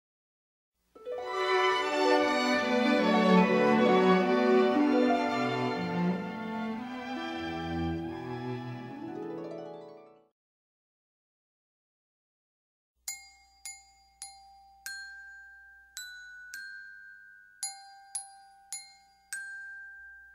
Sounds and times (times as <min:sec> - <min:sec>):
Music: 0:01.0 - 0:10.4, 0:13.1 - 0:20.3
Ding-dong: 0:13.1 - 0:20.3.